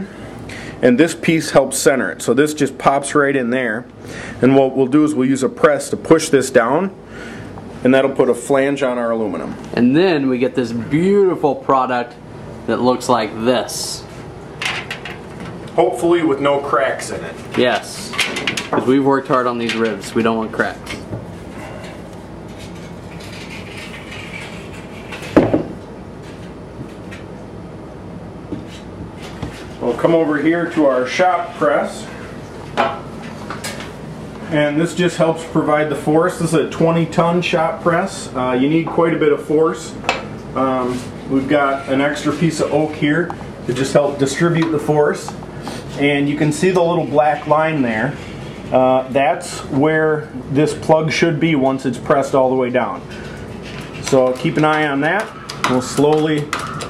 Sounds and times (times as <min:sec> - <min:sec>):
Speech: 0:00.8 - 0:07.0, 0:07.8 - 0:14.2, 0:15.8 - 0:21.0, 0:29.8 - 0:32.2, 0:34.4 - 0:40.0, 0:40.6 - 0:53.0, 0:54.0 - 0:56.6.